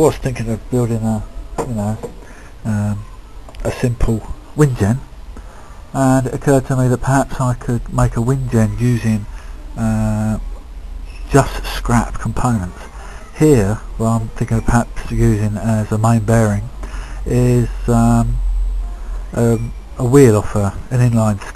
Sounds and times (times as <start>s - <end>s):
Speech: 0.0s - 5.1s, 5.9s - 10.5s, 11.2s - 18.4s, 19.3s - 21.5s.